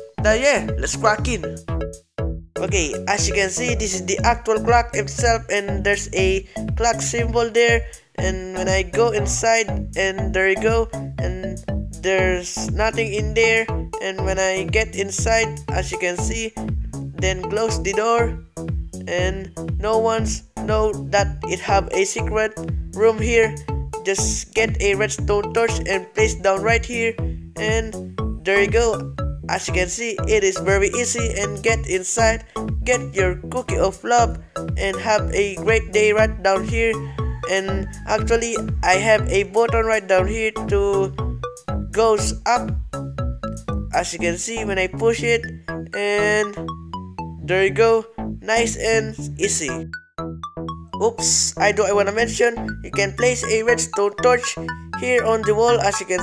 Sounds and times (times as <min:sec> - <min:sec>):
Music: 0:00.0 - 0:56.2
Speech: 0:00.2 - 0:01.5, 0:02.6 - 0:16.6, 0:17.2 - 0:18.4, 0:19.1 - 0:41.2, 0:42.0 - 0:42.8, 0:44.0 - 0:46.6, 0:47.5 - 0:49.8, 0:51.0 - 0:56.2.